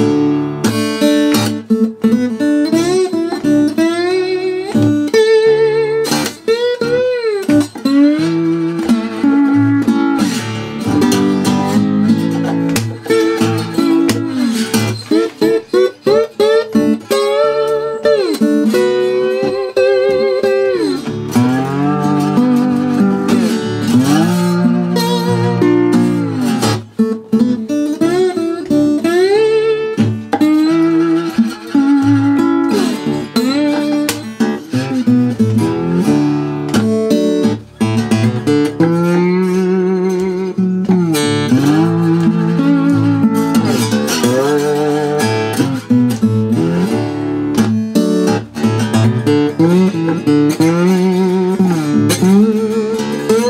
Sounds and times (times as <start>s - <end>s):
Blues: 0.0s - 53.4s
Steel guitar, slide guitar: 0.0s - 53.4s
Tapping (guitar technique): 0.0s - 53.4s.